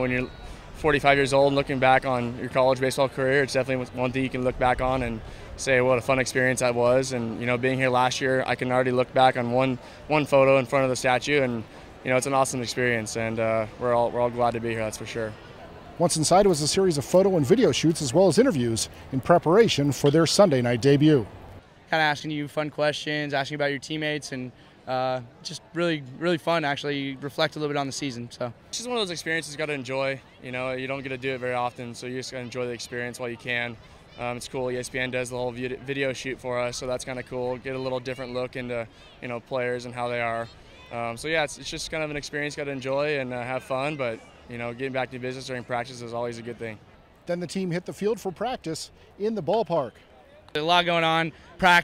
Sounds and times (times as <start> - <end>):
Speech: 0.0 - 15.4, 16.0 - 21.3, 21.9 - 51.8
Inside, public space: 0.0 - 51.8.